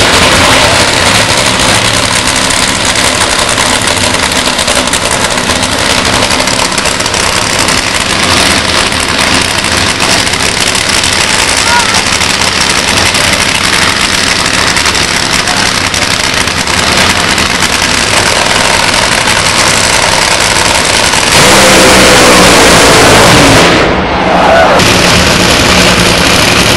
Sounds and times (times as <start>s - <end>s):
Speech: 11.6s - 12.1s.